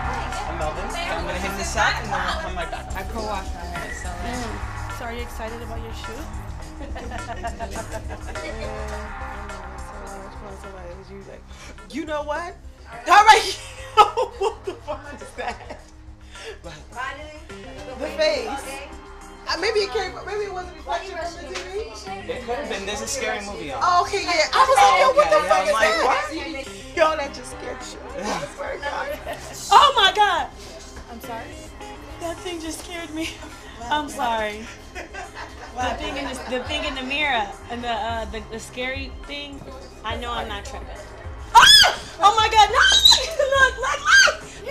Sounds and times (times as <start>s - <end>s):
Music: 0.0s - 44.7s.